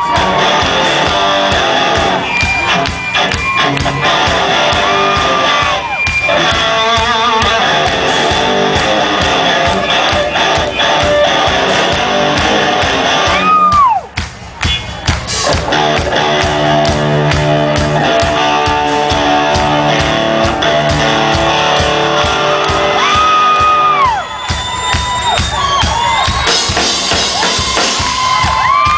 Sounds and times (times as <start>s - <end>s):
Electric guitar: 0.0s - 14.0s, 15.3s - 24.3s
Bass guitar: 0.0s - 28.9s.